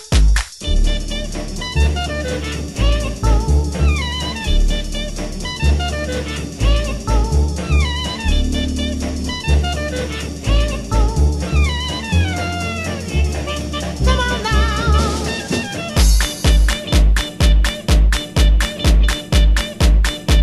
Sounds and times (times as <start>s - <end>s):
Swing music: 0.0s - 20.4s.